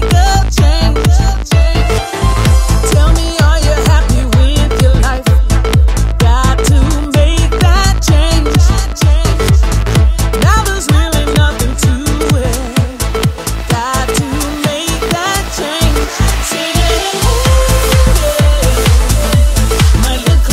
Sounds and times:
Music: 0:00.0 - 0:20.5.

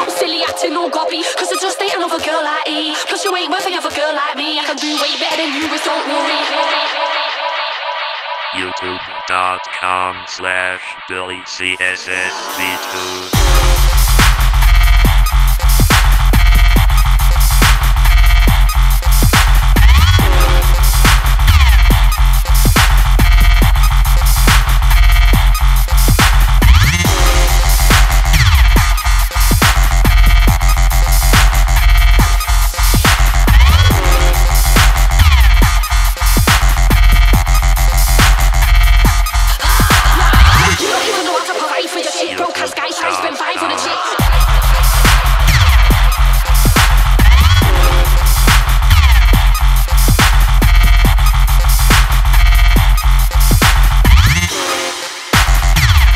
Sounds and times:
Dubstep: 0:00.0 - 0:56.1
Speech: 0:08.6 - 0:13.4, 0:42.3 - 0:44.2.

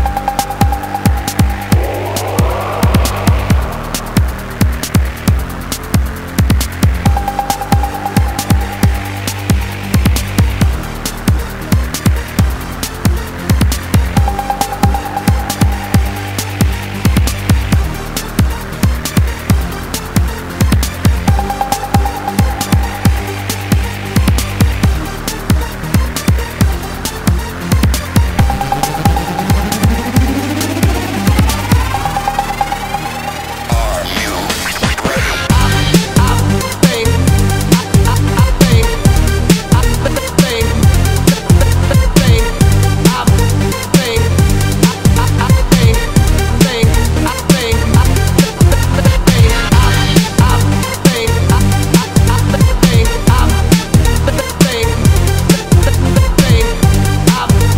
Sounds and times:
Music: 0:00.0 - 0:57.7.

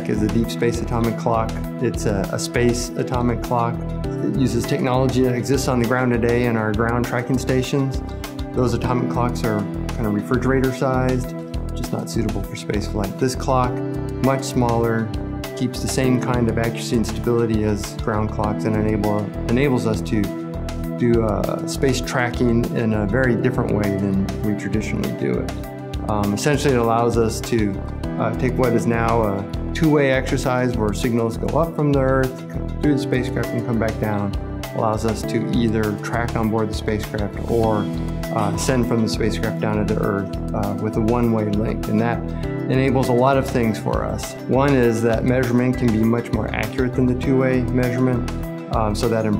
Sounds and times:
Speech: 0:00.0 - 0:20.4, 0:21.0 - 0:49.3
Music: 0:00.0 - 0:49.3.

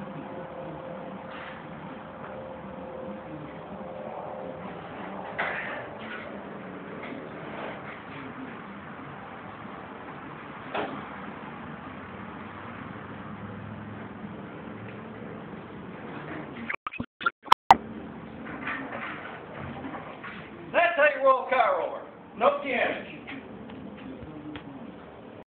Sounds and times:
Speech: 0:20.7 - 0:23.3.

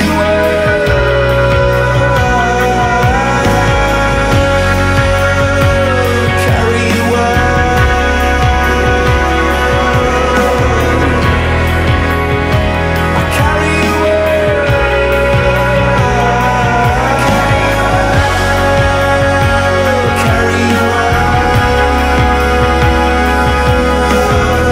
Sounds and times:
Sampler: 0:03.0 - 0:24.7.

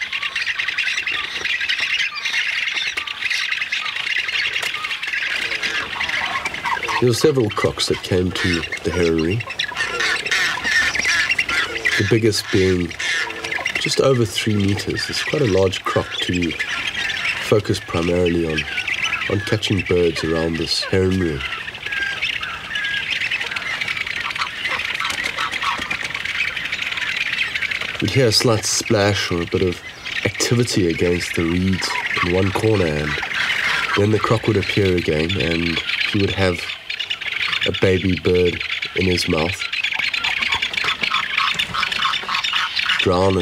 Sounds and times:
Outside, rural or natural: 0:00.0 - 0:43.4
Squawk: 0:00.0 - 0:43.4
Speech: 0:07.0 - 0:09.4, 0:12.0 - 0:13.0, 0:13.8 - 0:16.6, 0:17.4 - 0:18.7, 0:19.3 - 0:21.5, 0:28.0 - 0:33.2, 0:34.0 - 0:36.7, 0:37.6 - 0:39.6, 0:43.0 - 0:43.4.

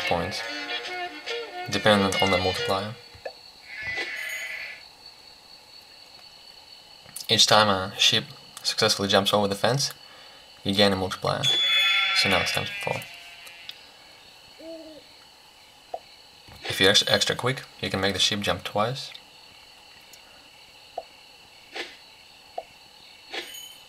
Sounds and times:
Speech: 0:00.0 - 0:00.5, 0:01.7 - 0:03.0, 0:07.2 - 0:10.0, 0:10.6 - 0:11.5, 0:12.2 - 0:13.0, 0:16.6 - 0:19.2
Music: 0:00.0 - 0:03.0
Bleat: 0:03.7 - 0:04.8, 0:11.5 - 0:13.8.

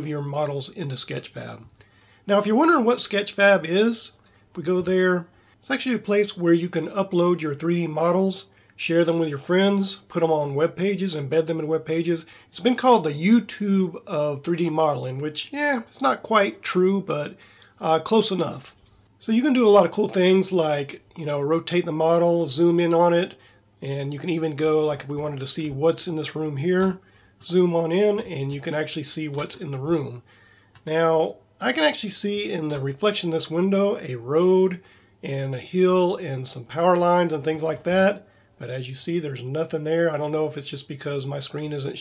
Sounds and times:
Narration, monologue: 0:00.0 - 0:42.0.

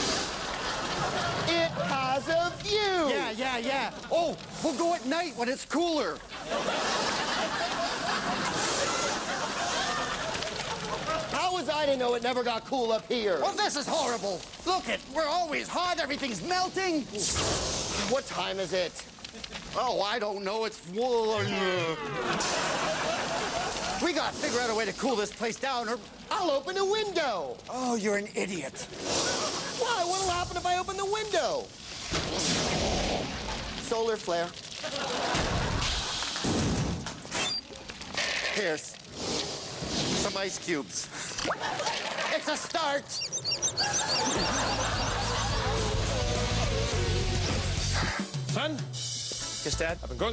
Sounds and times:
Speech: 0:01.5 - 0:06.2, 0:11.3 - 0:17.4, 0:18.0 - 0:19.0, 0:19.8 - 0:22.2, 0:24.0 - 0:28.9, 0:29.8 - 0:31.7, 0:33.8 - 0:34.6, 0:38.5 - 0:39.0, 0:40.2 - 0:41.1, 0:42.3 - 0:43.2, 0:49.6 - 0:50.3.

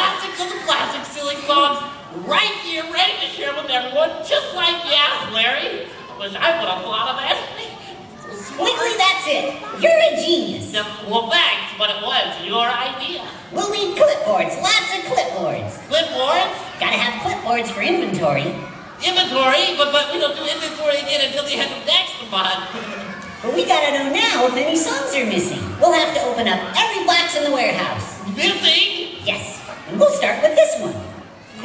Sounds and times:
Speech: 0:00.0 - 0:31.6.

